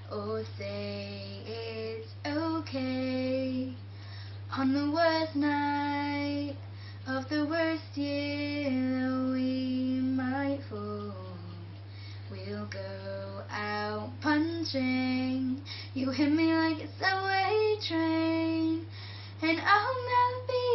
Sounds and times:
Child singing: 12.4 - 20.7.

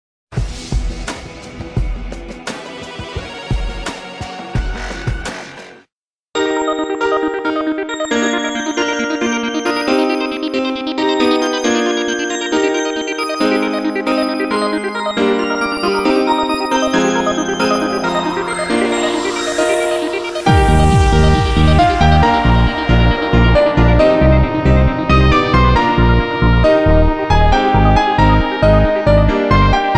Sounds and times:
Synthesizer: 6.4 - 29.9.

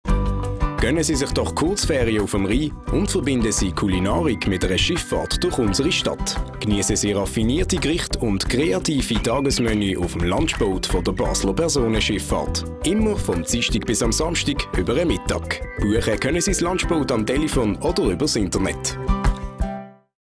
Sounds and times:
Music: 0.0 - 20.2
Speech: 0.8 - 19.0.

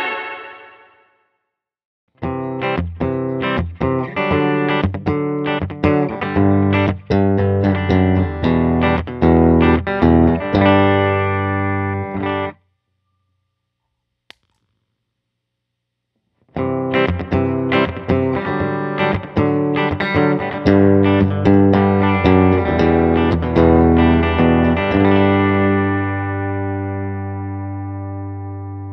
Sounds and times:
Music: 0.0 - 12.7, 16.5 - 28.9
Distortion: 2.1 - 28.9.

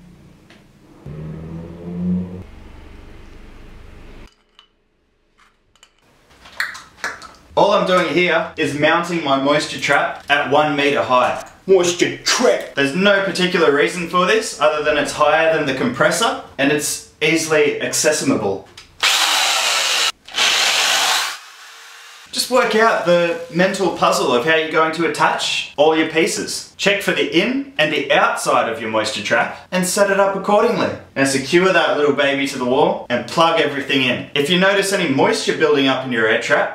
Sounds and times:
Speech: 7.6 - 18.7, 22.3 - 36.7.

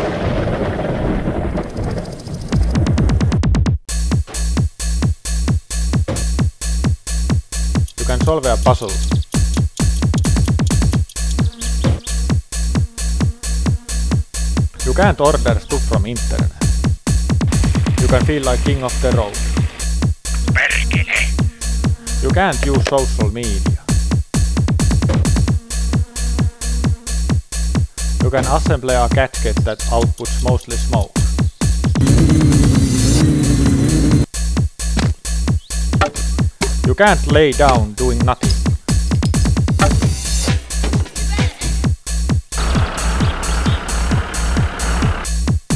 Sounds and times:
Music: 2.5 - 45.7
Speech: 8.0 - 9.0, 14.8 - 16.6, 18.0 - 19.4, 20.5 - 21.4, 22.2 - 23.9, 28.2 - 31.2, 36.8 - 38.6.

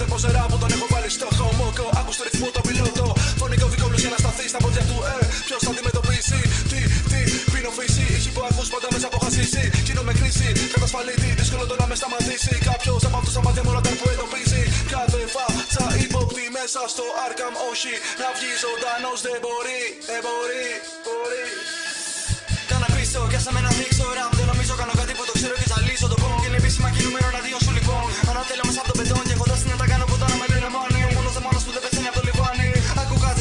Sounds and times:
Dubstep: 0.0 - 33.4.

